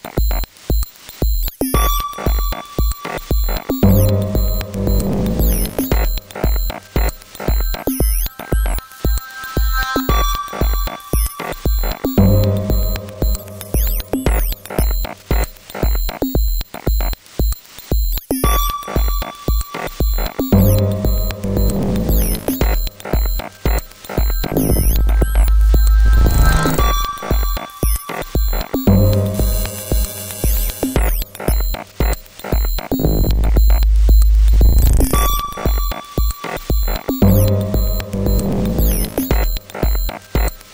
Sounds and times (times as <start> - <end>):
Music: 0.0 - 40.7.